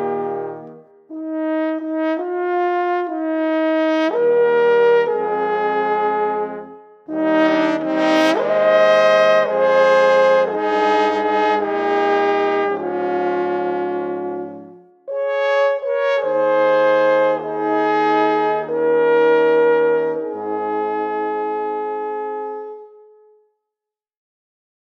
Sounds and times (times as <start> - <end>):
Trombone: 0.0 - 22.9
French horn: 0.0 - 23.4
Trumpet: 0.0 - 23.4.